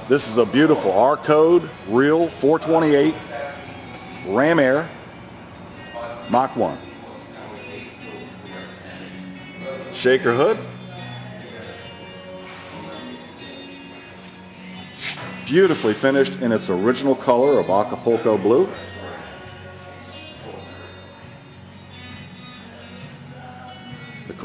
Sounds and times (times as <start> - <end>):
Music: 0.0 - 24.4.